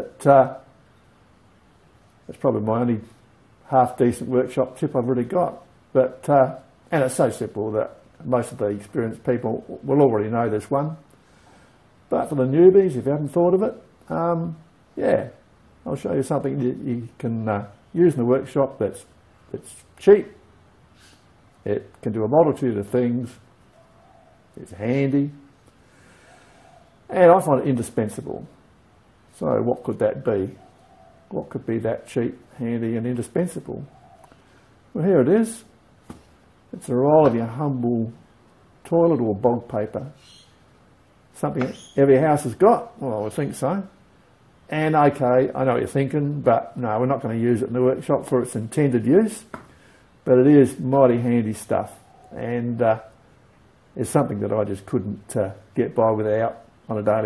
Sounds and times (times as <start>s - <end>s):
Speech: 0.0s - 0.7s, 2.3s - 11.1s, 12.1s - 20.4s, 21.6s - 23.4s, 24.6s - 25.5s, 27.1s - 28.6s, 29.4s - 30.6s, 31.3s - 33.9s, 35.0s - 35.8s, 36.7s - 40.2s, 41.4s - 44.0s, 44.7s - 49.5s, 50.2s - 53.2s, 54.0s - 57.2s.